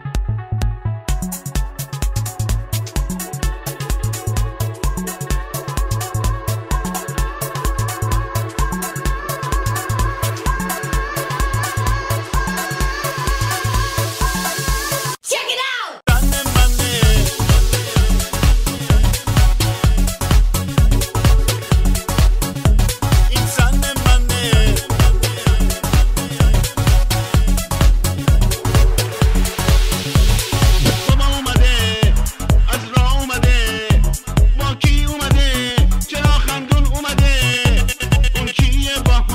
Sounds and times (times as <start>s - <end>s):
House music: 0.0s - 15.3s, 16.1s - 39.3s.